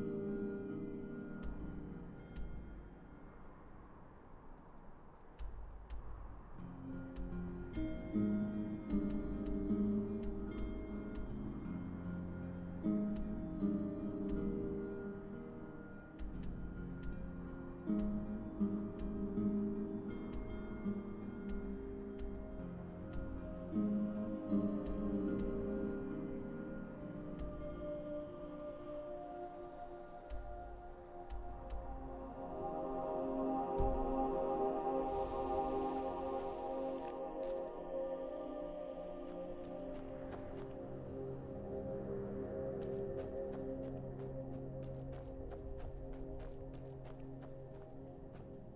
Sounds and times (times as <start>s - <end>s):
Music: 0.0s - 48.7s.